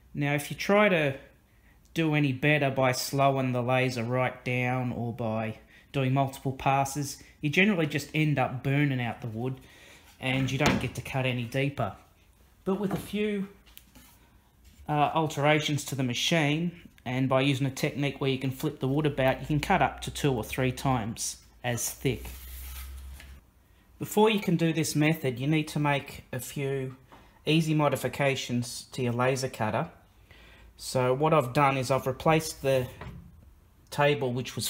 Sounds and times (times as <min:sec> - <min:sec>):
Speech: 0:00.1 - 0:01.3, 0:02.0 - 0:09.6, 0:10.2 - 0:13.6, 0:14.8 - 0:22.4, 0:24.0 - 0:30.0, 0:30.8 - 0:33.1, 0:33.9 - 0:34.6.